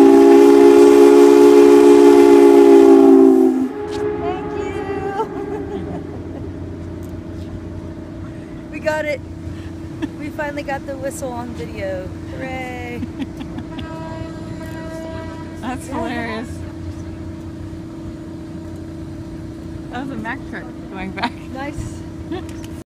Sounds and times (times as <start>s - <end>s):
Boat, Water vehicle: 0.0s - 22.8s.